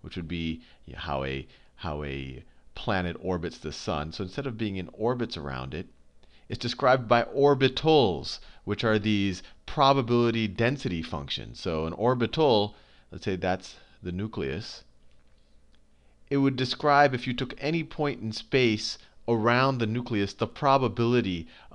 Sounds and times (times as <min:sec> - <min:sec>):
Speech: 0:00.0 - 0:05.9, 0:06.5 - 0:14.9, 0:16.3 - 0:21.7.